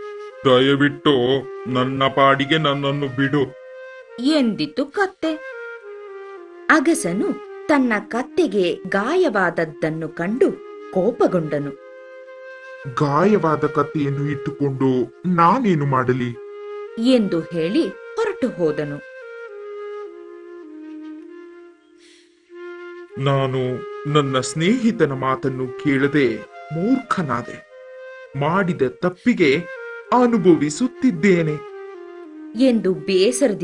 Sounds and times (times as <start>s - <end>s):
Flute: 0.0s - 33.6s.